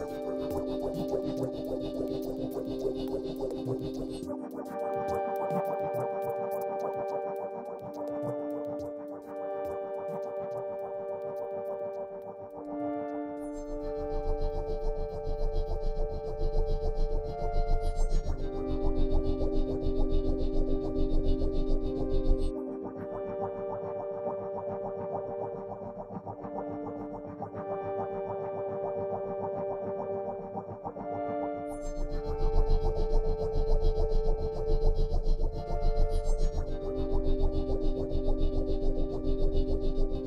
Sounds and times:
Synthesizer: 0:00.0 - 0:40.2.

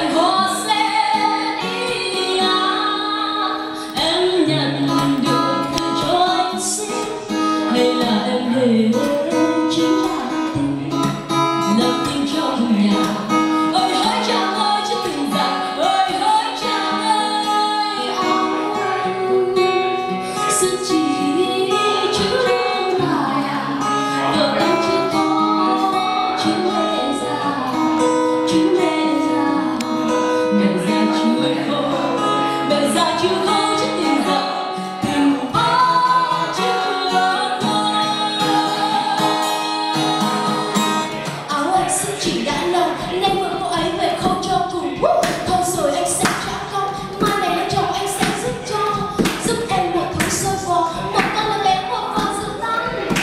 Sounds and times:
Guitar: 0:00.0 - 0:53.2.

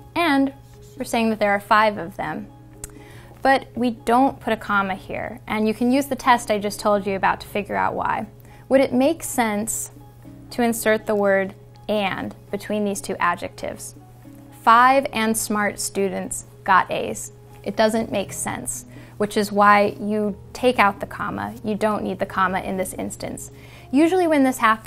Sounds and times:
Inside, small room: 0:00.0 - 0:24.8
Music: 0:00.0 - 0:24.8
Speech: 0:03.4 - 0:09.9, 0:14.7 - 0:24.8.

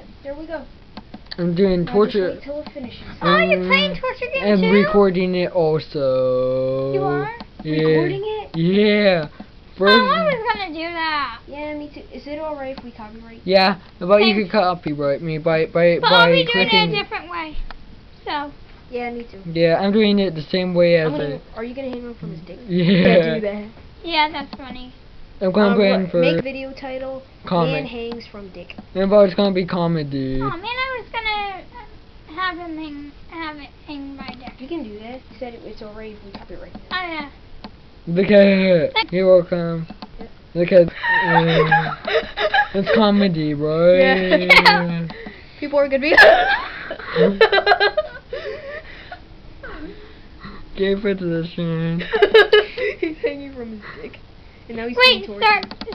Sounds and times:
Inside, small room: 0:00.0 - 0:55.9.

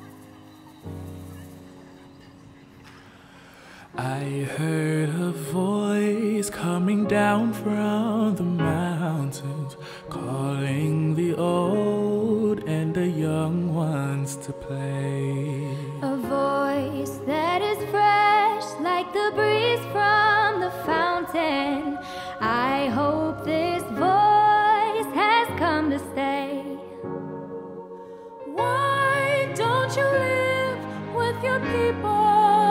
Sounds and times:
Music: 0:00.0 - 0:32.7.

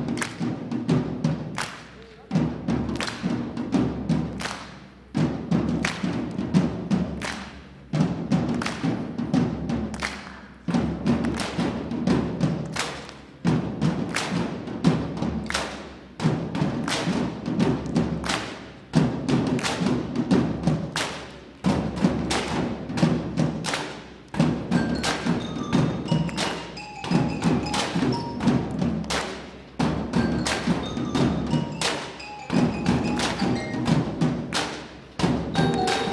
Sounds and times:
Drum: 0:00.0 - 0:36.1.

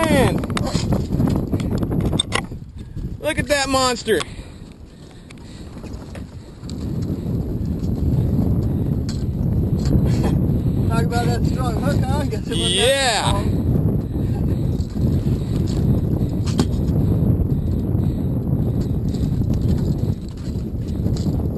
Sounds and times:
Boat, Water vehicle: 0:00.0 - 0:16.9, 0:19.1 - 0:21.5
Outside, rural or natural: 0:00.0 - 0:21.5.

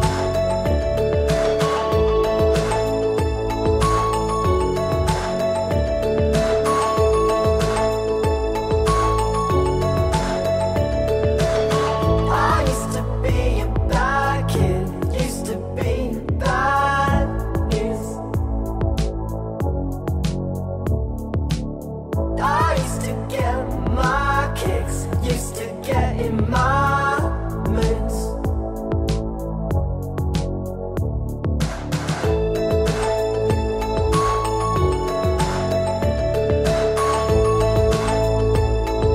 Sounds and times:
Music: 0:00.0 - 0:39.1.

